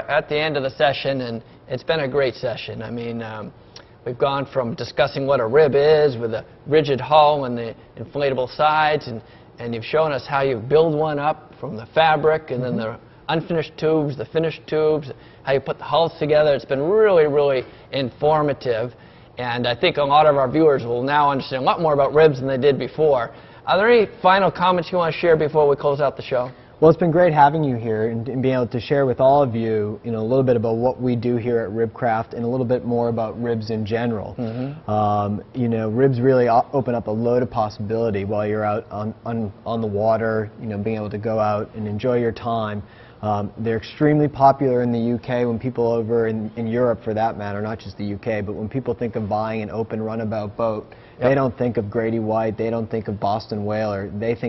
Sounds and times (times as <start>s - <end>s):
Speech: 0.0s - 54.4s.